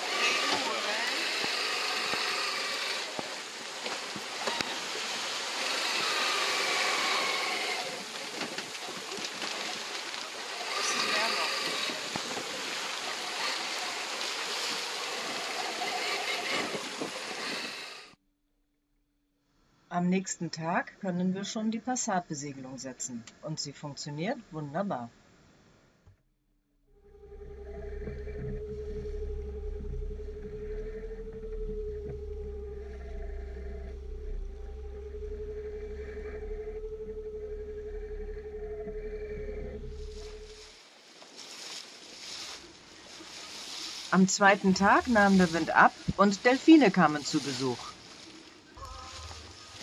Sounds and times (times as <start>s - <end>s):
Speech: 19.9s - 25.1s, 44.2s - 47.9s.